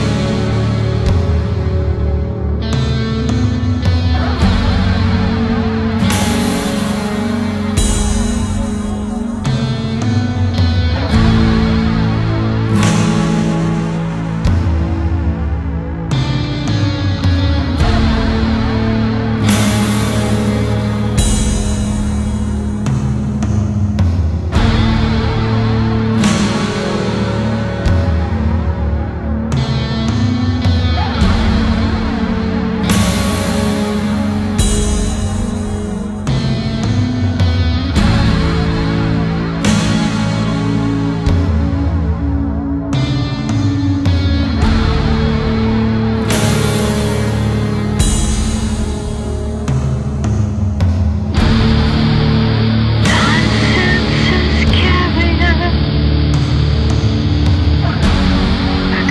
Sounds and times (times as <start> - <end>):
Music: 0.0 - 59.1.